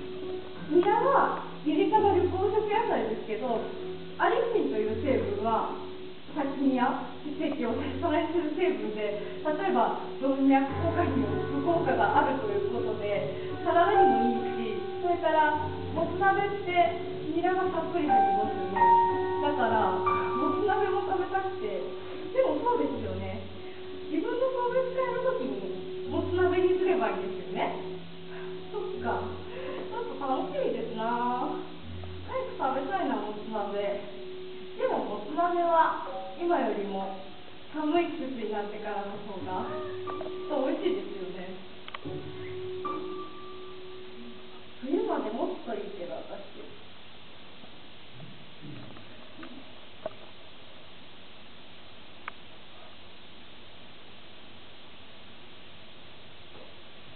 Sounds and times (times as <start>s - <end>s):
Female speech, woman speaking: 0.6s - 23.5s, 24.1s - 27.9s, 28.7s - 31.7s, 32.3s - 34.1s, 34.8s - 41.7s, 44.8s - 46.8s
Narration, monologue: 0.6s - 41.8s.